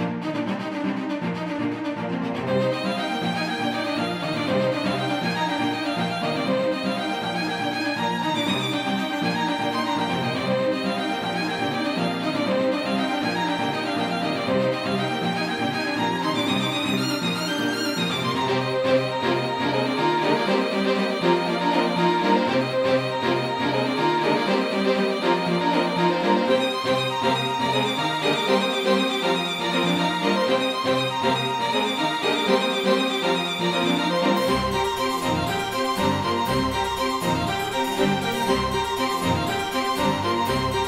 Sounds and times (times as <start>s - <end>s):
Music: 0.0s - 40.8s.